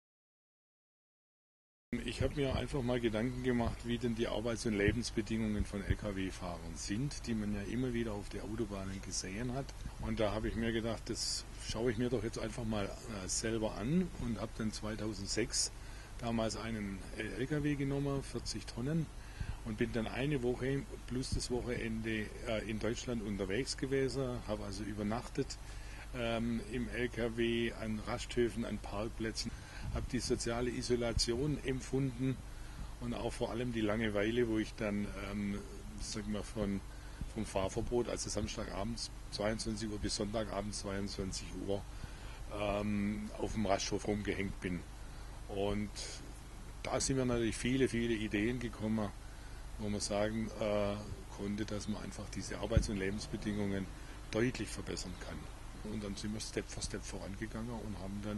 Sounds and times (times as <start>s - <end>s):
Speech: 2.0s - 41.9s, 42.5s - 44.9s, 45.5s - 49.2s, 49.8s - 58.3s.